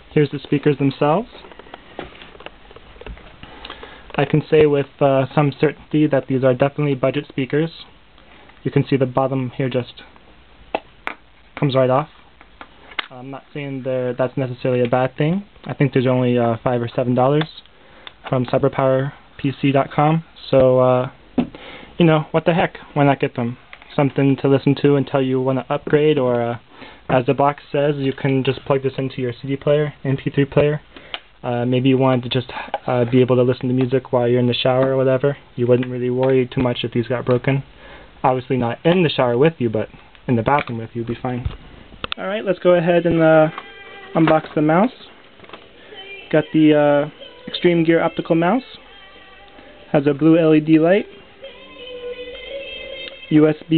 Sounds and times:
Speech: 0.1 - 1.5, 4.2 - 8.0, 8.6 - 10.2, 11.6 - 12.2, 13.1 - 21.2, 22.0 - 30.8, 31.4 - 41.6, 42.2 - 43.6, 44.2 - 45.2, 46.3 - 48.8, 49.9 - 51.1, 53.3 - 53.7
Music: 43.0 - 44.8, 45.9 - 53.7.

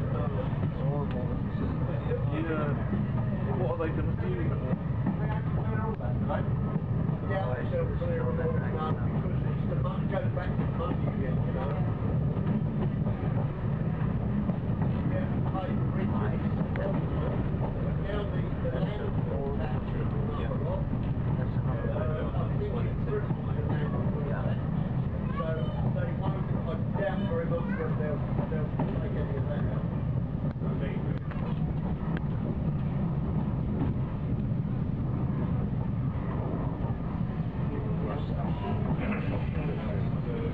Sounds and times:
Speech: 0.0 - 13.8, 14.5 - 32.1, 37.4 - 40.5
Train: 0.0 - 40.5.

